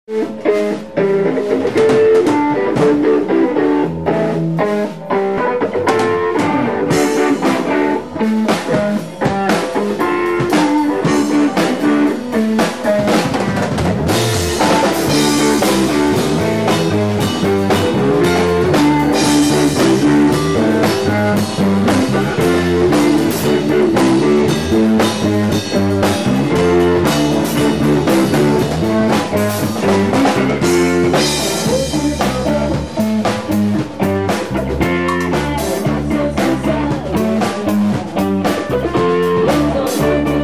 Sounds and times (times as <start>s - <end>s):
Funk: 0.1s - 40.4s.